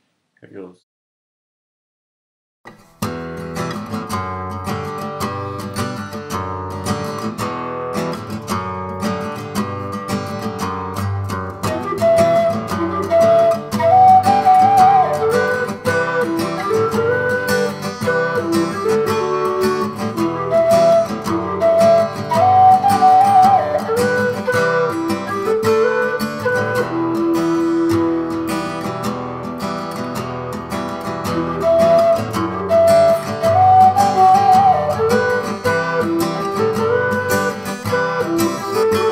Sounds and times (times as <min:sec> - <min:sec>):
Acoustic guitar: 0:02.7 - 0:39.1.